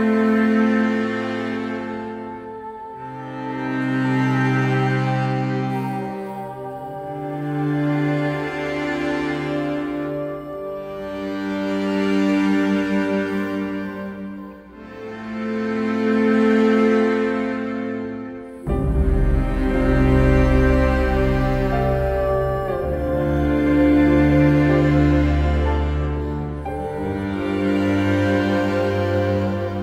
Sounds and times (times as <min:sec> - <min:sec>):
Background music: 0:00.0 - 0:29.8.